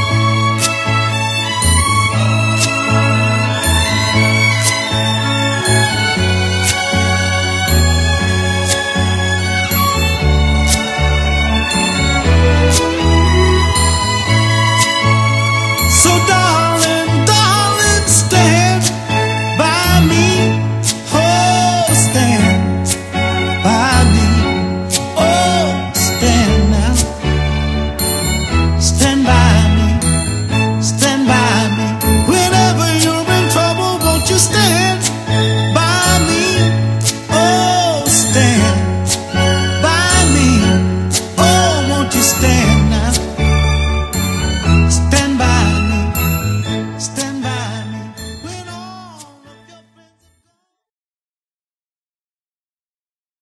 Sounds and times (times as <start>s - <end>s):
Jingle (music): 0.0s - 50.8s.